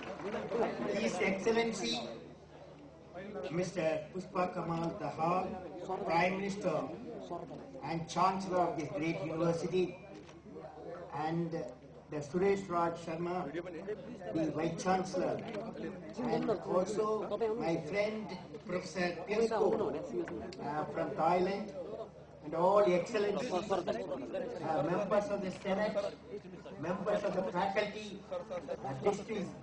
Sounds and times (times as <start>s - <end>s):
Male speech, man speaking: 0.3s - 2.3s, 3.1s - 29.6s.